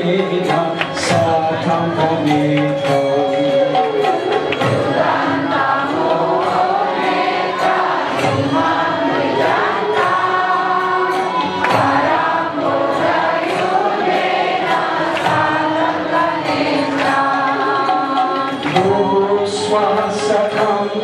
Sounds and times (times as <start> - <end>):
Male singing: 0.0 - 4.2, 17.2 - 21.0
Music: 0.0 - 21.0.